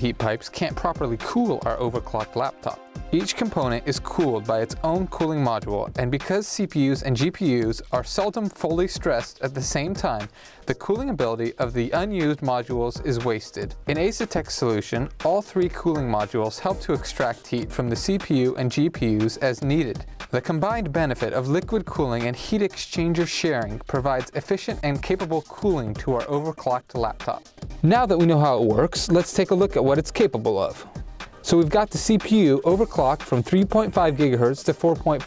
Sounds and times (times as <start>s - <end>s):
Speech: 0.0s - 35.2s.